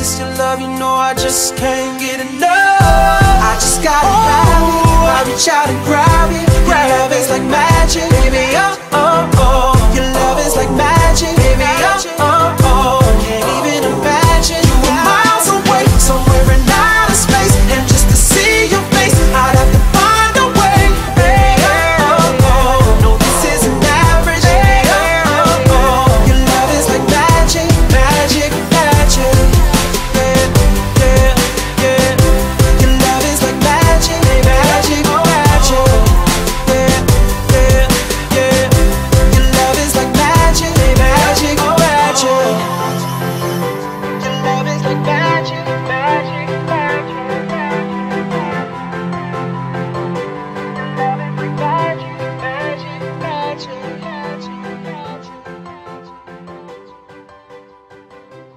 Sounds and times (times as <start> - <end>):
Singing: 0.0 - 48.7, 50.6 - 57.0.